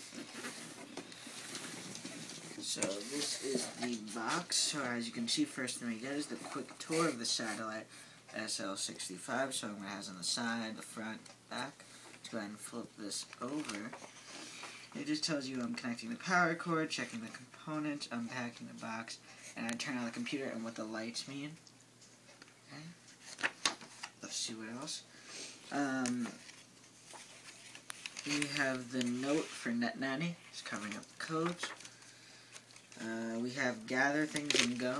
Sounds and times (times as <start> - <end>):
Inside, small room: 0.0 - 34.9
Speech: 2.6 - 14.0, 15.0 - 21.6, 24.2 - 25.0, 25.7 - 26.4, 28.2 - 31.8, 33.0 - 34.9.